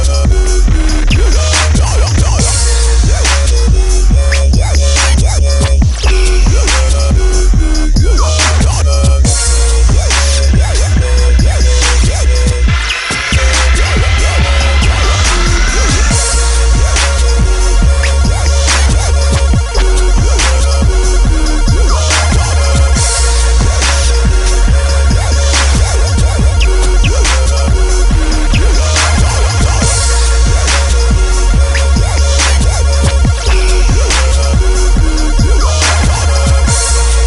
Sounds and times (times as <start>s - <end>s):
Dubstep: 0.0s - 37.2s.